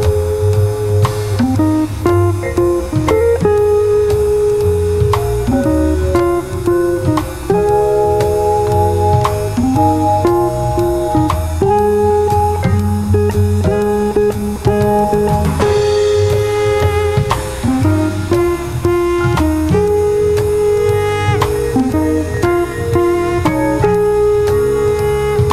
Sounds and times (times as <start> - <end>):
Musical instrument: 0.0 - 25.5.